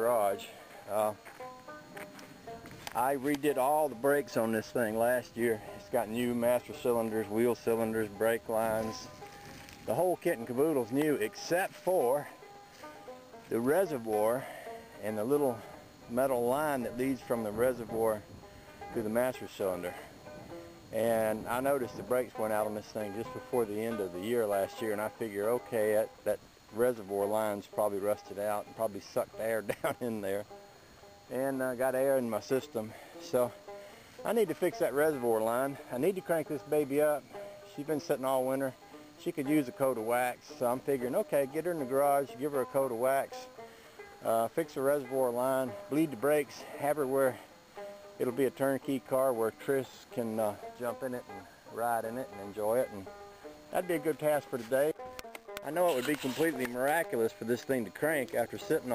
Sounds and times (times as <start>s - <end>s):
Speech: 0.0s - 1.2s, 3.0s - 9.1s, 9.9s - 12.3s, 13.5s - 18.2s, 19.0s - 20.1s, 21.0s - 30.4s, 31.3s - 33.6s, 34.2s - 43.5s, 44.2s - 47.5s, 48.2s - 53.1s, 53.7s - 55.0s, 55.6s - 58.9s
Music: 0.0s - 58.9s
Outside, rural or natural: 0.0s - 58.9s.